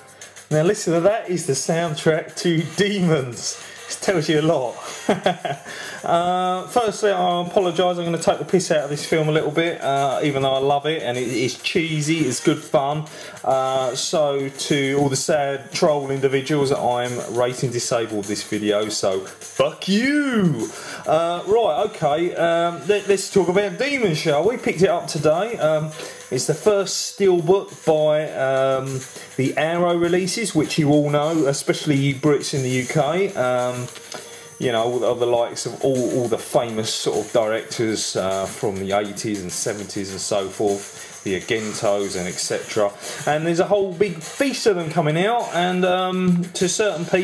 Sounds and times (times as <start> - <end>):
Music: 0.0 - 47.2
Speech: 0.5 - 4.8, 6.1 - 34.0, 34.6 - 47.2.